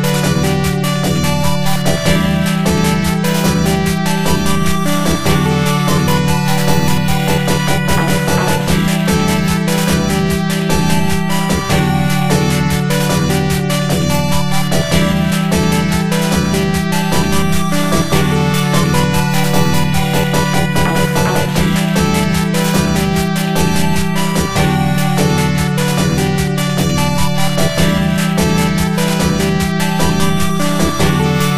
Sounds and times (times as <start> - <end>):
Video game music: 0.0 - 31.5.